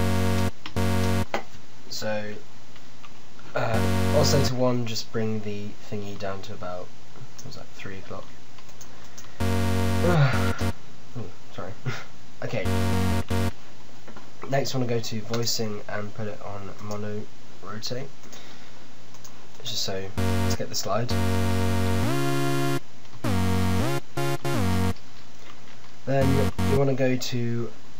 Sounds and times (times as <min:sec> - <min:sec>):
Electronic music: 0:00.0 - 0:01.3, 0:03.8 - 0:04.6, 0:09.4 - 0:10.8, 0:12.6 - 0:13.6, 0:20.2 - 0:25.0, 0:26.2 - 0:26.9
Speech: 0:01.9 - 0:02.4, 0:03.5 - 0:08.4, 0:11.2 - 0:12.7, 0:14.4 - 0:18.1, 0:19.6 - 0:21.2, 0:26.1 - 0:27.8.